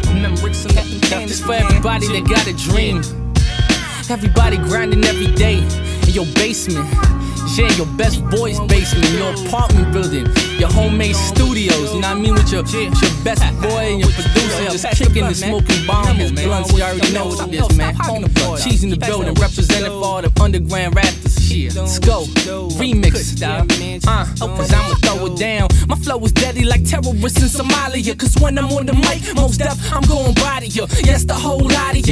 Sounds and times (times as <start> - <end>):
Exciting music: 0.0 - 19.9, 24.4 - 25.3
Rhythm and blues: 0.0 - 32.1.